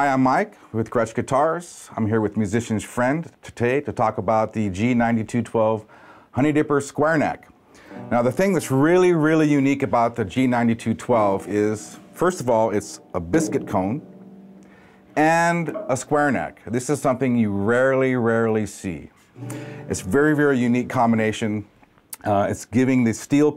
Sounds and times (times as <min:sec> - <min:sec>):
Speech: 0:00.0 - 0:07.5, 0:08.1 - 0:14.1, 0:15.2 - 0:19.1, 0:19.9 - 0:23.5
Guitar: 0:07.7 - 0:22.3.